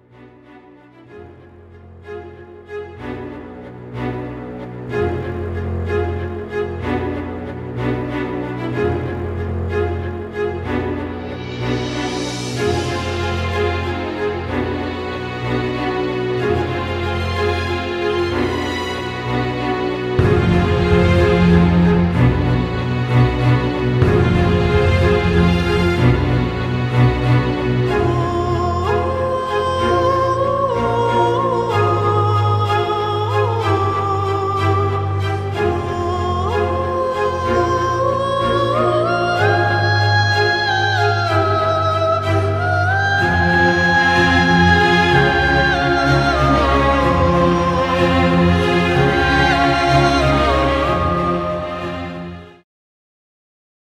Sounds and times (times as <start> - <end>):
Music: 0.0 - 52.6.